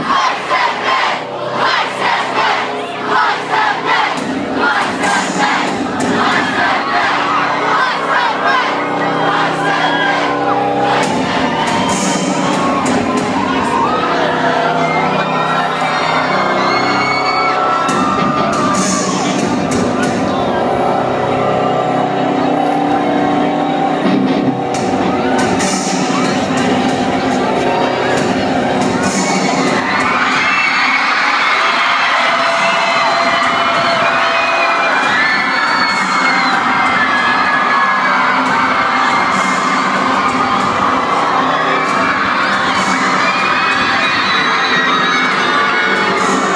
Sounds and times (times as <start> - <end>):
Music: 0.0 - 46.5.